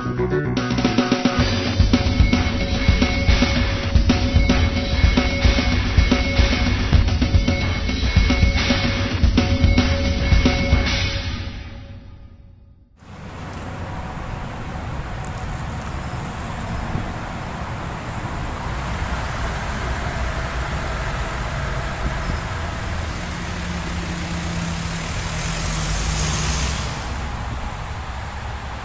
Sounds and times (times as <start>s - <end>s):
Car: 13.0s - 28.8s
Traffic noise, roadway noise: 13.0s - 28.8s.